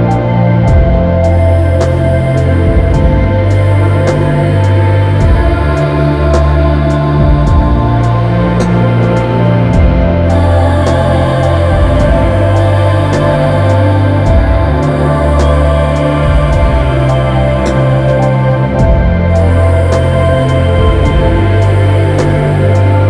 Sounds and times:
Music: 0.0s - 23.0s.

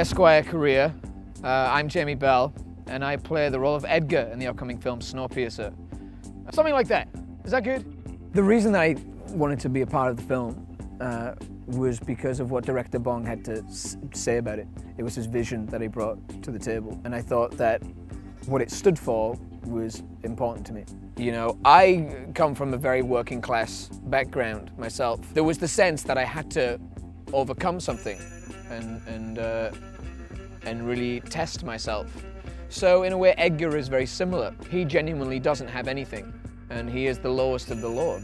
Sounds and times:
Speech: 0.0s - 5.7s, 6.5s - 7.8s, 8.4s - 17.8s, 18.5s - 29.8s, 30.6s - 32.1s, 32.7s - 38.2s
Music: 0.0s - 38.2s.

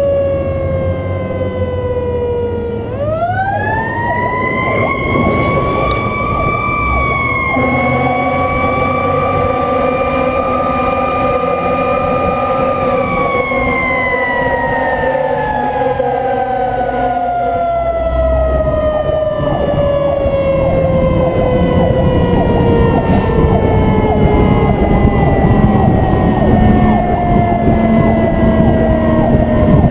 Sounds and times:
Vehicle: 0.0s - 29.9s.

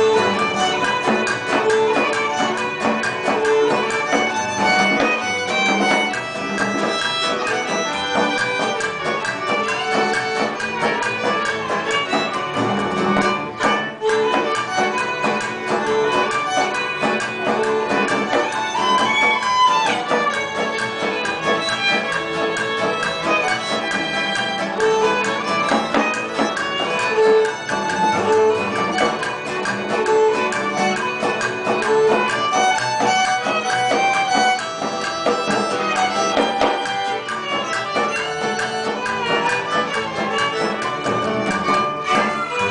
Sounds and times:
Violin, fiddle: 0.0s - 42.7s.

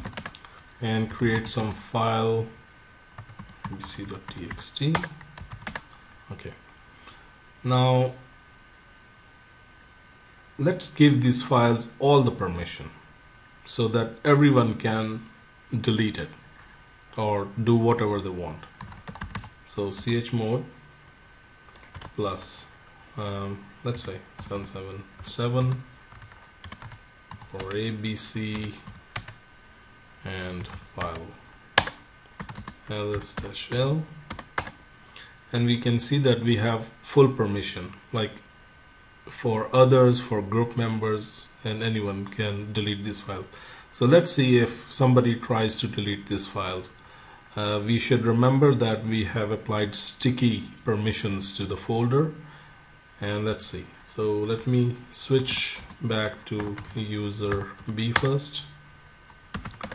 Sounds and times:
Computer keyboard: 0.0s - 0.4s, 3.2s - 5.9s, 18.8s - 19.5s, 21.8s - 22.2s, 25.7s - 27.8s, 31.8s - 33.5s, 34.3s - 34.8s, 59.6s - 59.9s.

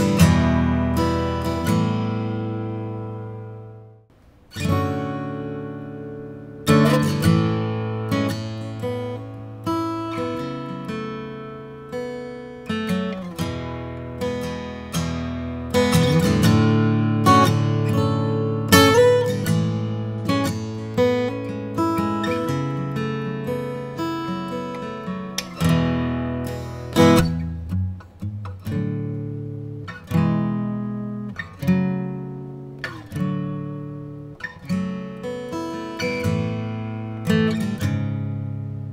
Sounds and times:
Acoustic guitar: 0.0s - 38.9s.

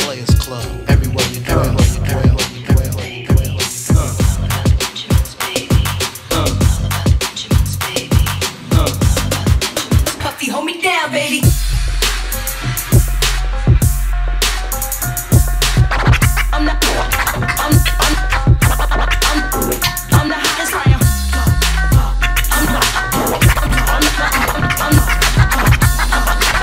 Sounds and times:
Electronic music: 0.0s - 10.2s, 11.4s - 26.6s
Scratching (performance technique): 0.0s - 10.4s, 11.4s - 26.6s.

